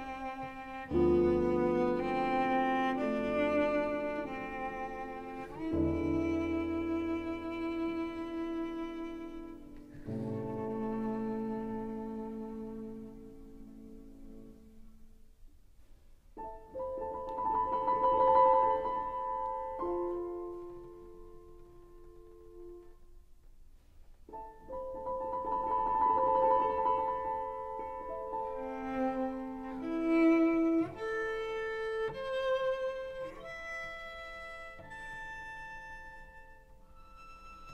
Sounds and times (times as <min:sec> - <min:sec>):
Violin, fiddle: 0:00.0 - 0:13.6, 0:26.6 - 0:37.7.